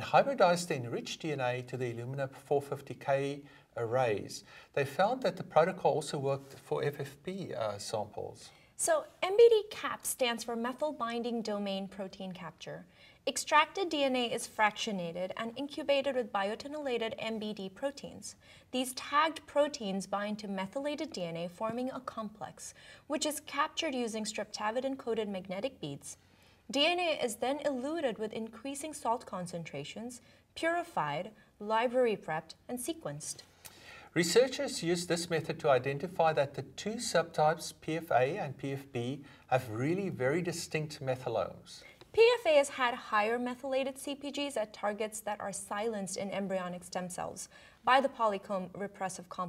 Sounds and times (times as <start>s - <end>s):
Speech: 0.0s - 33.4s, 34.2s - 49.4s
Inside, small room: 0.0s - 49.4s.